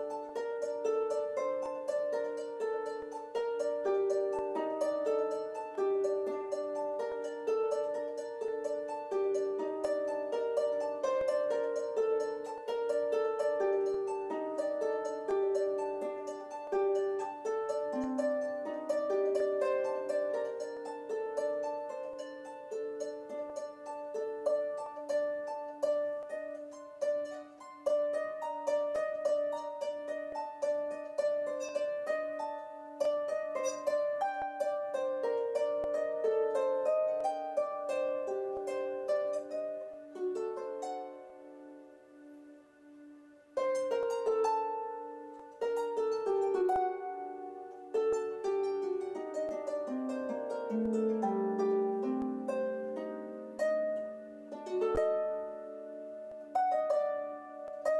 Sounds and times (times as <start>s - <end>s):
Harp: 0.0s - 58.0s
Pizzicato: 0.0s - 58.0s.